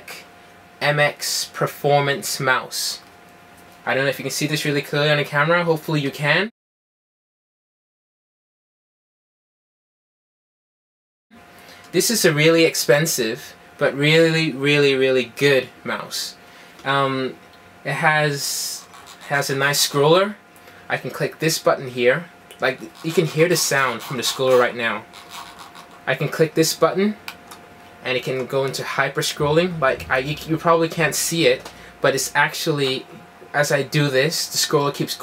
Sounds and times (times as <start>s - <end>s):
Speech: 0.0s - 3.1s, 3.8s - 6.5s, 11.9s - 25.1s, 26.0s - 27.3s, 28.0s - 35.2s.